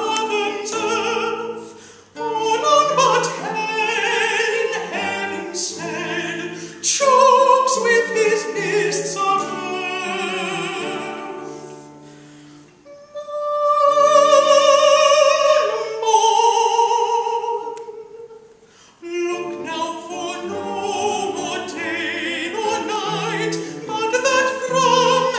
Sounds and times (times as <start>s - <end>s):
Acoustic guitar: 0.0s - 25.3s.